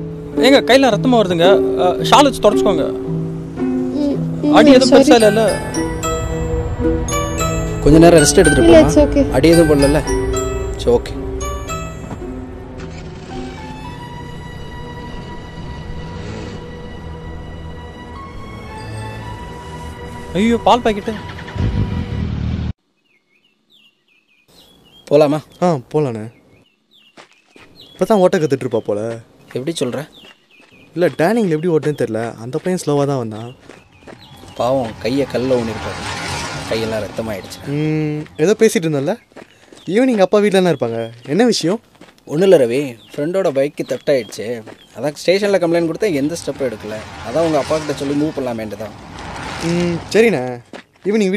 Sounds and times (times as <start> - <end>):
Music: 0.0 - 22.7
Outside, urban or manmade: 0.0 - 51.3.